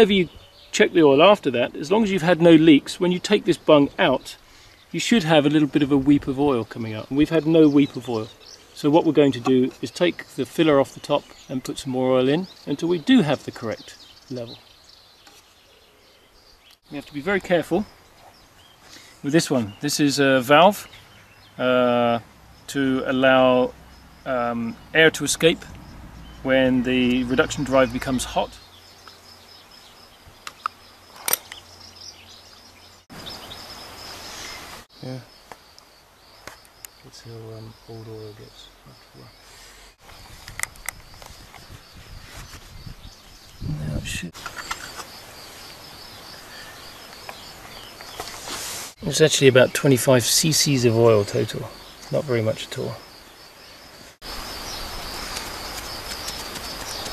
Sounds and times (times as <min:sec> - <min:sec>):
Speech: 0:00.0 - 0:04.4, 0:05.0 - 0:14.6, 0:16.9 - 0:17.9, 0:19.2 - 0:20.9, 0:21.6 - 0:23.7, 0:24.3 - 0:25.7, 0:26.4 - 0:28.6, 0:35.0 - 0:35.3, 0:37.0 - 0:39.3, 0:43.6 - 0:44.4, 0:49.0 - 0:53.0
Outside, rural or natural: 0:00.0 - 0:57.1.